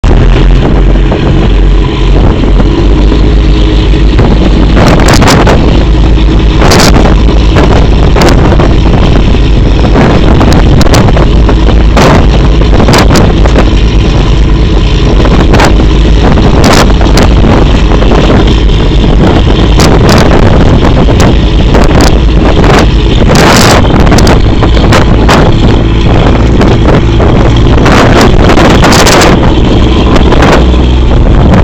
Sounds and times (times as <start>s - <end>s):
Ship: 0.0s - 31.6s
Wind noise (microphone): 0.0s - 31.6s.